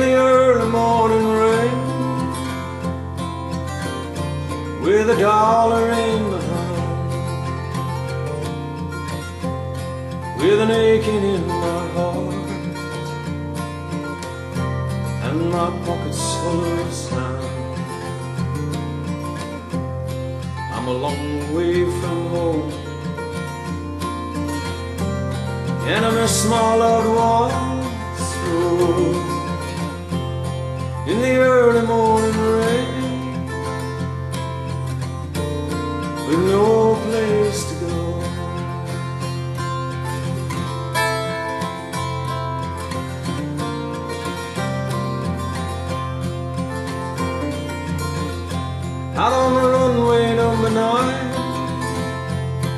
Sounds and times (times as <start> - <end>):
Music: 0.0 - 52.7.